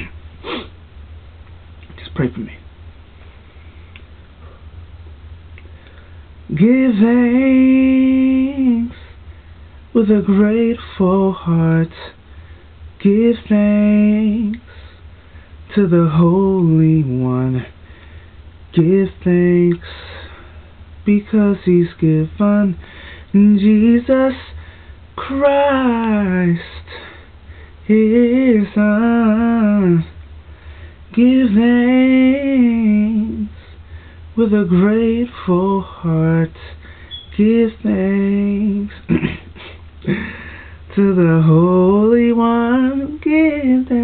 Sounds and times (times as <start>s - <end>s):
Male singing: 6.5s - 9.0s, 10.0s - 12.2s, 13.0s - 14.6s, 15.7s - 17.7s, 18.7s - 20.0s, 21.0s - 24.6s, 25.2s - 26.9s, 27.9s - 30.1s, 31.1s - 33.6s, 34.4s - 39.2s, 40.9s - 44.0s.